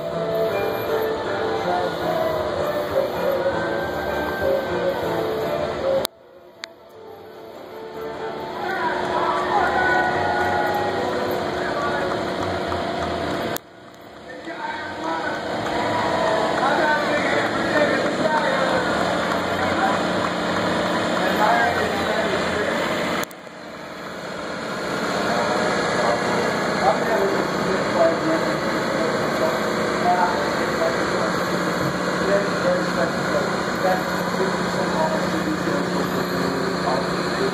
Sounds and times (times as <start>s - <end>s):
Ship: 0.0s - 37.5s
Wind: 0.0s - 37.5s.